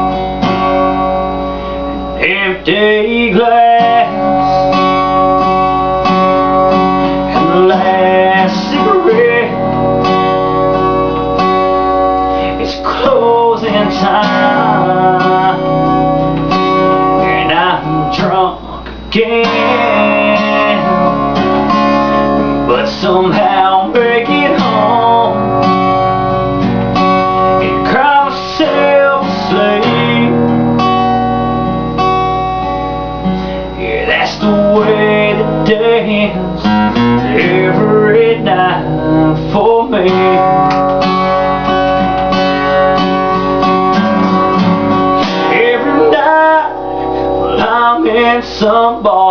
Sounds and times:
Music: 0.0 - 49.3.

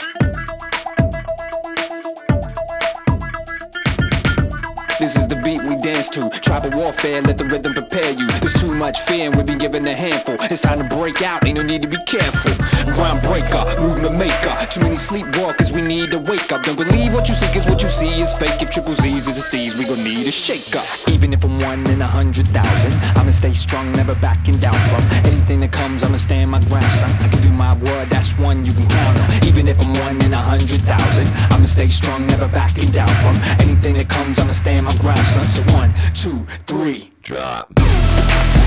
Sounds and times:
Music: 0.0 - 36.3, 37.8 - 38.6.

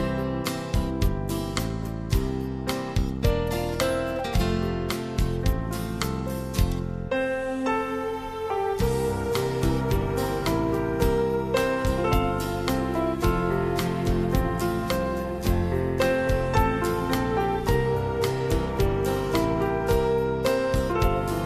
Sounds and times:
Music: 0.0 - 21.4.

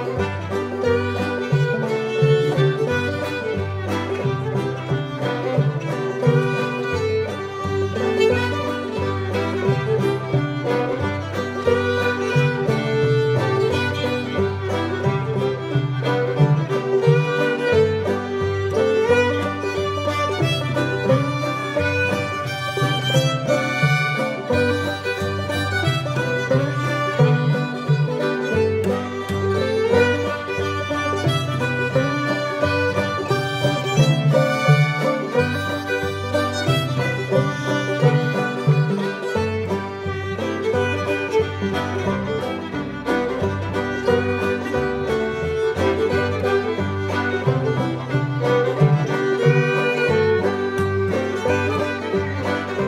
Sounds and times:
Music: 0.0 - 52.8.

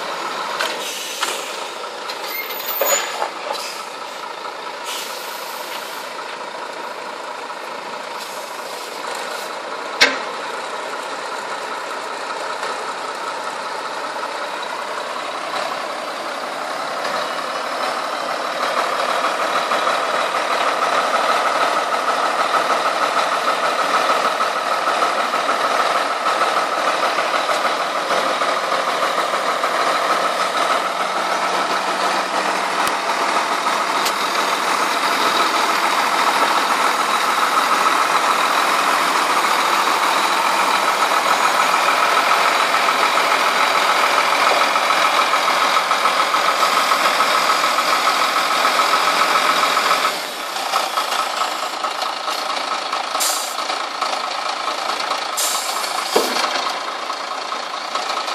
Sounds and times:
Truck: 0.0 - 58.3.

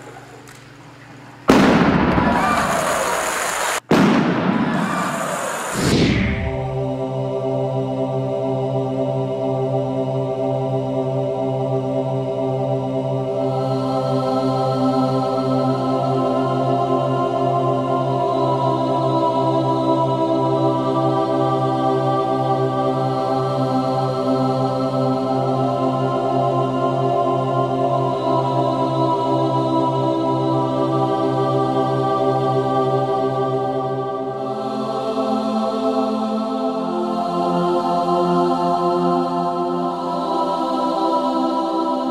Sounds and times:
Music: 5.9 - 42.1.

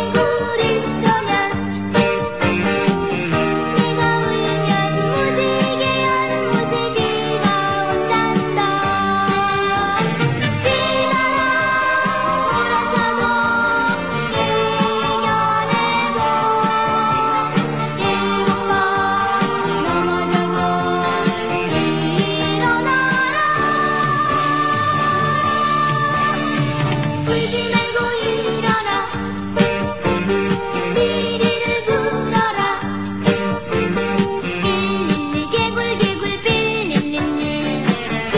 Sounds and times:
Music: 0.0 - 38.3.

